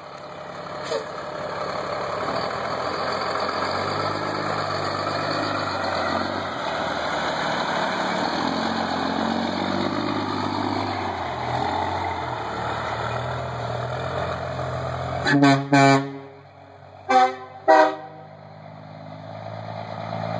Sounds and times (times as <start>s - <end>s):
Medium engine (mid frequency): 0.0s - 20.3s
Truck: 0.0s - 20.3s.